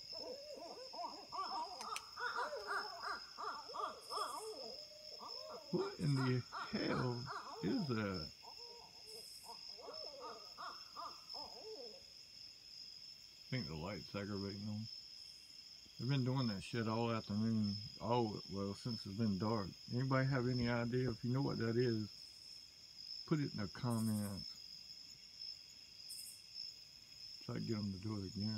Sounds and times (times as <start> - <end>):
Speech: 5.8 - 8.3, 13.5 - 14.9, 16.0 - 22.1, 23.3 - 24.5, 27.5 - 28.5.